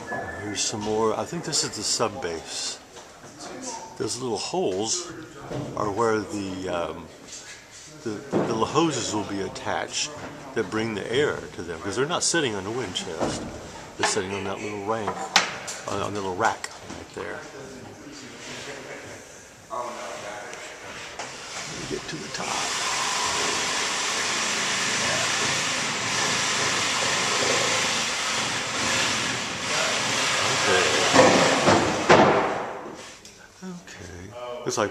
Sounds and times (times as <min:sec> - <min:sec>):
Speech: 0:00.4 - 0:07.2, 0:07.8 - 0:20.8, 0:21.7 - 0:22.7, 0:29.7 - 0:31.1, 0:33.6 - 0:34.9
Wood: 0:21.1 - 0:33.0.